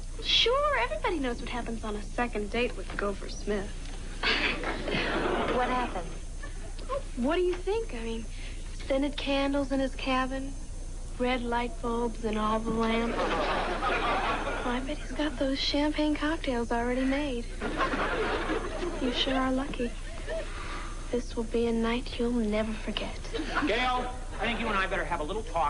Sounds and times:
Speech: 0.2 - 3.7, 19.0 - 20.0.

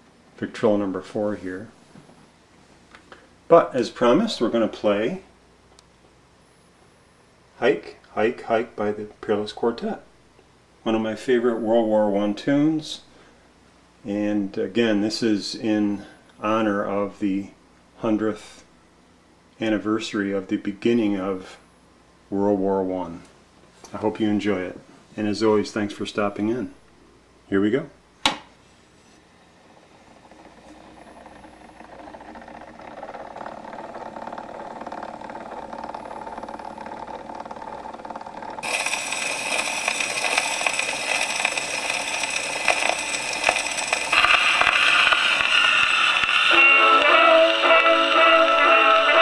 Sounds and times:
Inside, small room: 0.0 - 49.2
Music: 46.5 - 49.2.

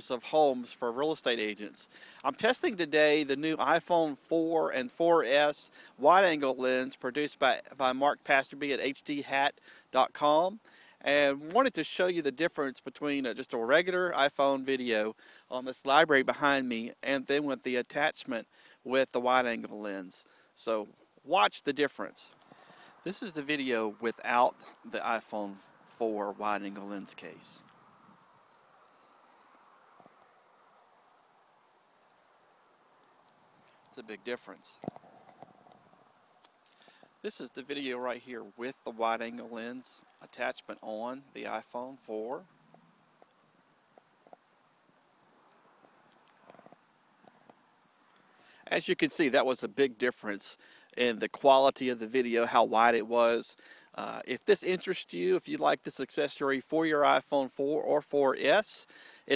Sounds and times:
Speech: 0.0 - 22.4, 23.1 - 27.6, 34.0 - 34.8, 37.2 - 42.4, 48.7 - 59.3.

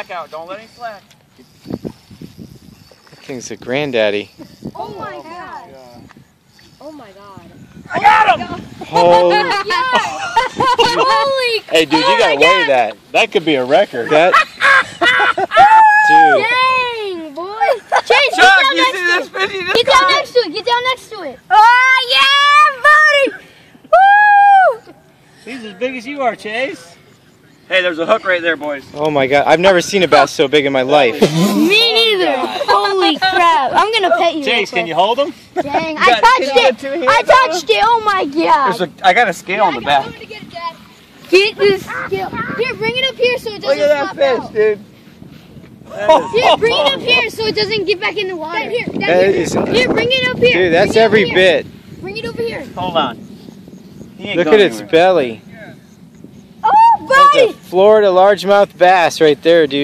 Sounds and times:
Laughter: 9.5 - 11.3, 14.1 - 15.7, 17.6 - 18.3, 32.4 - 33.3, 35.5 - 36.0, 45.9 - 46.7.

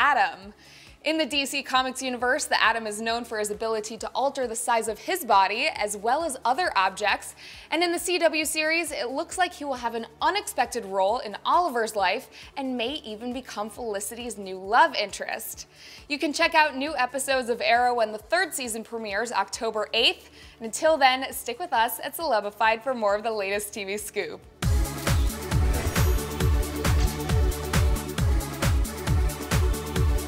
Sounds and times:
Music: 0.0 - 30.2
Speech: 1.1 - 24.4.

